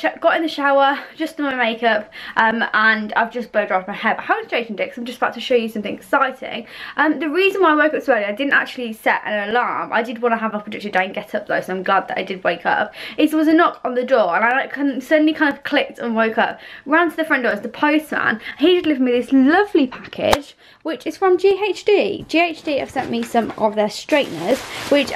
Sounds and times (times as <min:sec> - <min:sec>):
Speech: 0:00.0 - 0:25.1.